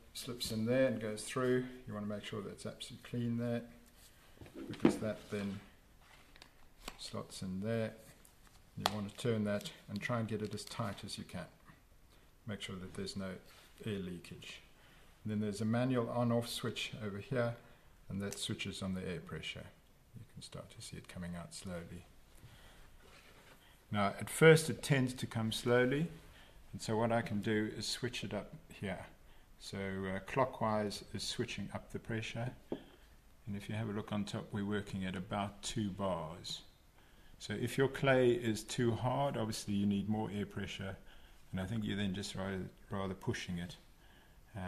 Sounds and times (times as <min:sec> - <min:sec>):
Speech: 0:00.0 - 0:03.8, 0:04.7 - 0:05.8, 0:06.9 - 0:08.2, 0:08.8 - 0:11.7, 0:12.4 - 0:22.1, 0:23.9 - 0:32.6, 0:33.4 - 0:36.7, 0:37.4 - 0:43.9.